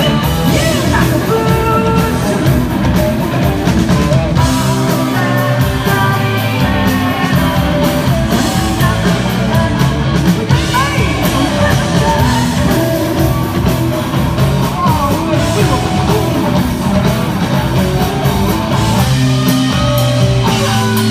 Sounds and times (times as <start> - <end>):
Singing: 0.0 - 2.6, 4.4 - 13.9
Rock and roll: 0.0 - 21.1.